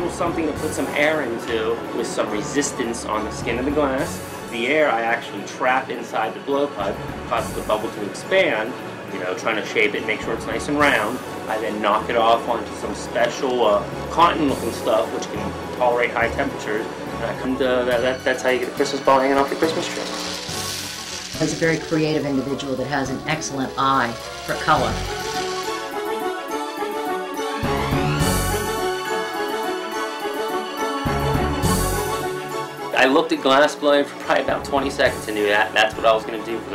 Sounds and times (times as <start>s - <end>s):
Speech: 0.0s - 20.2s, 21.4s - 25.0s, 33.0s - 36.7s
Music: 0.0s - 36.7s.